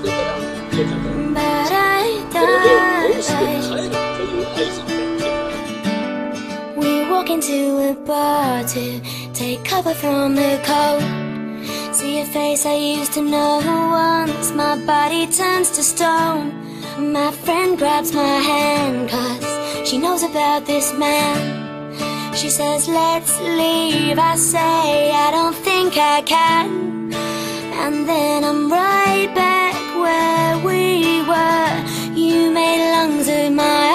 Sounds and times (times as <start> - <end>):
Music: 0.0 - 33.9.